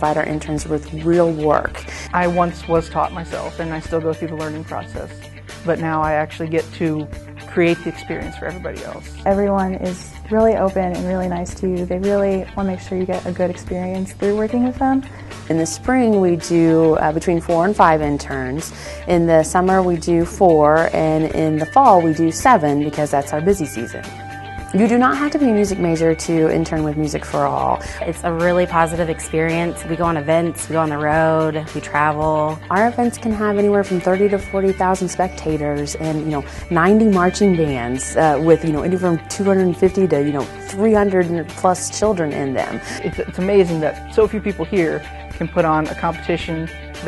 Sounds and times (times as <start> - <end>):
Speech: 0.0 - 24.0, 24.7 - 47.0.